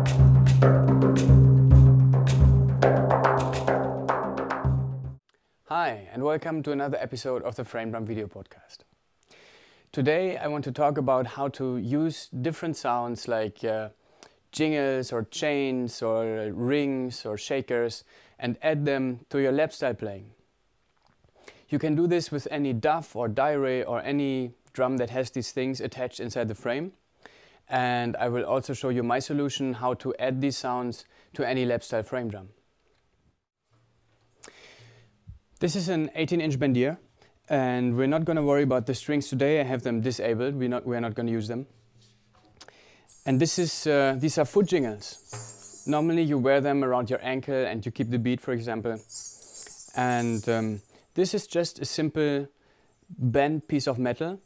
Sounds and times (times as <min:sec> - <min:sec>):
Speech: 0:05.7 - 0:08.9, 0:09.9 - 0:20.4, 0:21.7 - 0:27.0, 0:27.7 - 0:32.6, 0:35.6 - 0:41.7, 0:43.2 - 0:45.3, 0:45.9 - 0:49.0, 0:50.0 - 0:54.4.